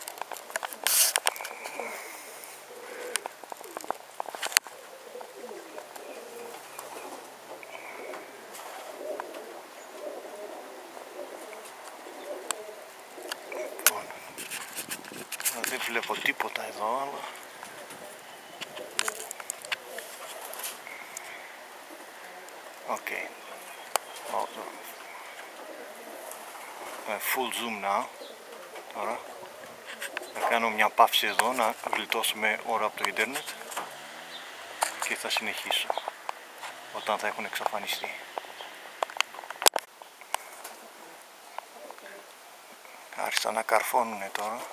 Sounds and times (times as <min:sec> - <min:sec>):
Pigeon, dove: 0:00.0 - 0:39.6.